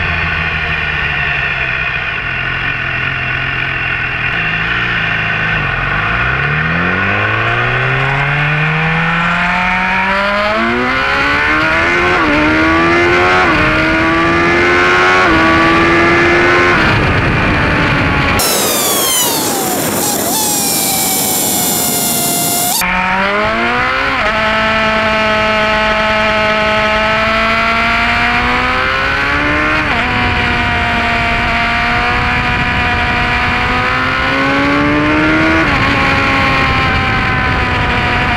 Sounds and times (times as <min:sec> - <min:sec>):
Motorcycle: 0:00.0 - 0:38.3.